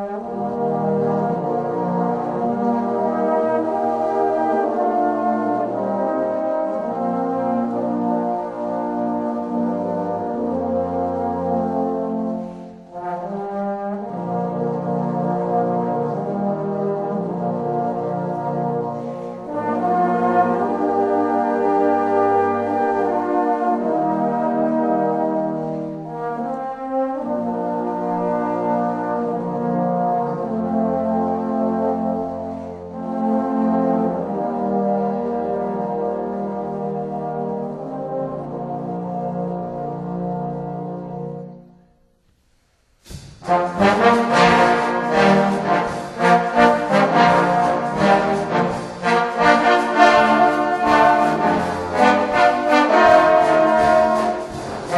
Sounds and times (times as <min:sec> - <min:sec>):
Trombone: 0:00.0 - 0:41.8, 0:43.0 - 0:54.9.